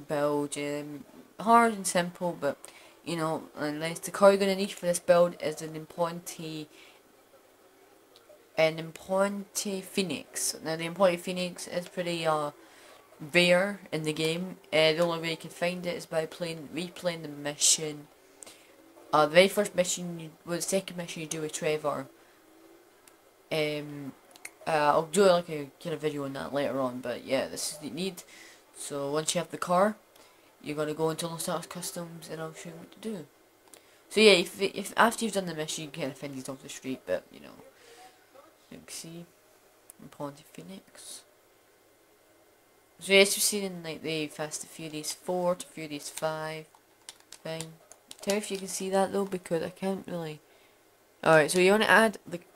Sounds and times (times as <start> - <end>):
Speech: 0.0 - 6.7, 8.6 - 12.6, 13.2 - 18.1, 19.1 - 22.1, 23.5 - 30.0, 30.6 - 33.3, 34.1 - 39.3, 40.0 - 41.3, 43.0 - 46.7, 47.4 - 50.4, 51.2 - 52.5.